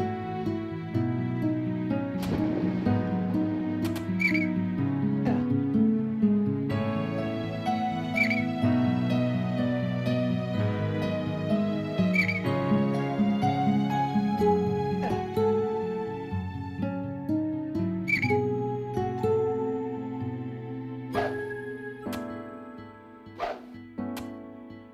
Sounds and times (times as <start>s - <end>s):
Tender music: 0.0s - 24.9s.